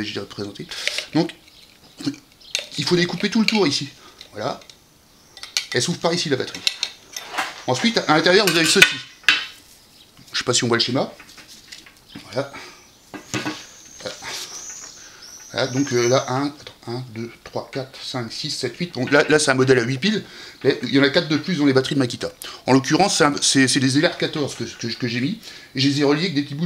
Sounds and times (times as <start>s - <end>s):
Speech: 0.0s - 1.4s, 2.8s - 4.6s, 5.8s - 6.6s, 7.7s - 9.1s, 10.3s - 11.2s, 12.2s - 12.6s, 15.5s - 26.6s.